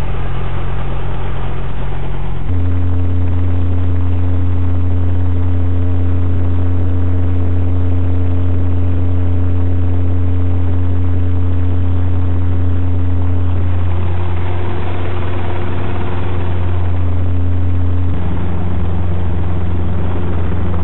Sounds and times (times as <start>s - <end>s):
Vehicle: 0.0s - 20.8s.